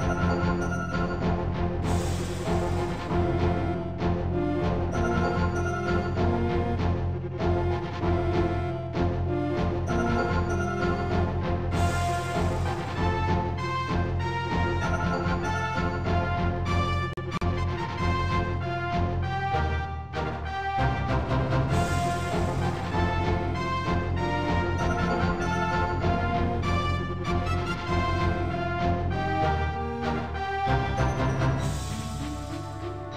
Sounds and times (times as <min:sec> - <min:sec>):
Theme music: 0:00.0 - 0:33.1.